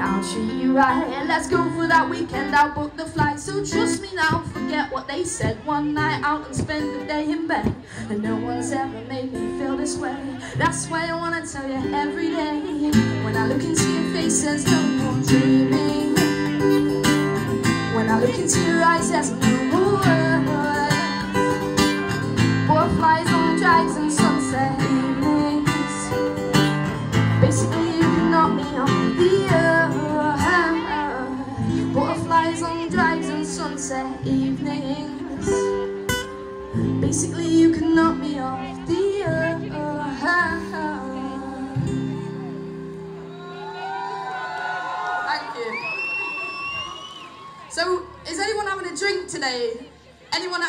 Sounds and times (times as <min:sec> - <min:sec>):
Female singing: 0:00.0 - 0:16.5, 0:17.9 - 0:21.4, 0:22.6 - 0:26.4, 0:27.4 - 0:35.9, 0:36.8 - 0:42.3
Acoustic guitar: 0:00.0 - 0:44.5.